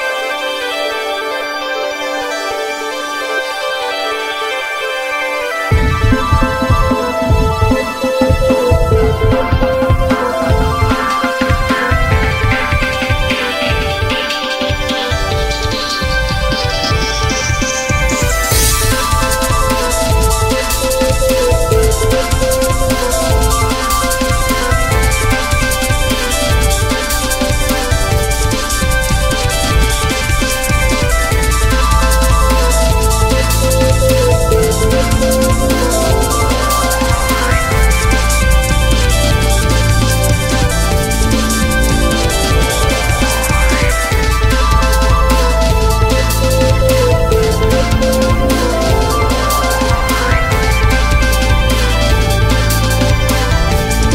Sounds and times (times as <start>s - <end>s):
Exciting music: 0.0s - 54.1s
Rhythm and blues: 0.0s - 54.1s.